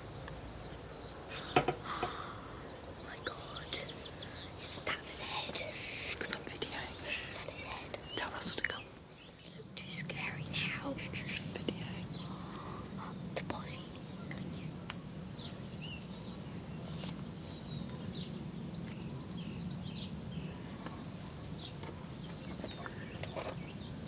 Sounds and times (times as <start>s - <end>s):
Whispering: 2.9s - 14.6s.